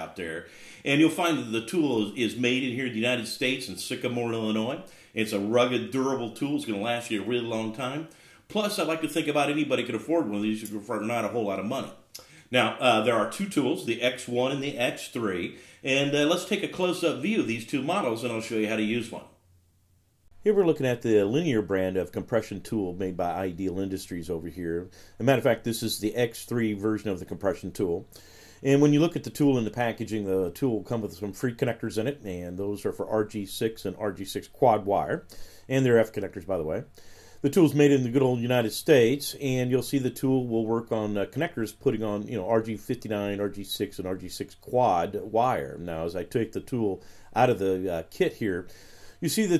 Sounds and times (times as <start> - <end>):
Speech: 0.0 - 19.4, 20.4 - 49.5.